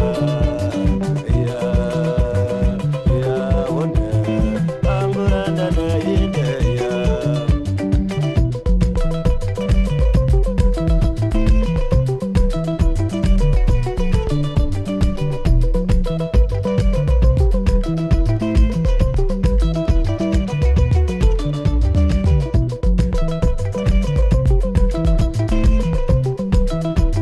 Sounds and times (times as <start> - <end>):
Salsa music: 0.0 - 27.2.